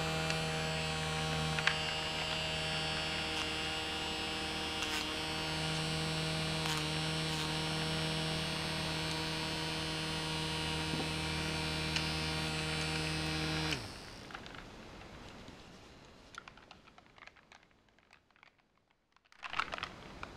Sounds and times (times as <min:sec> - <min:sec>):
Hum: 0:00.0 - 0:15.6
Mains hum: 0:00.0 - 0:18.6.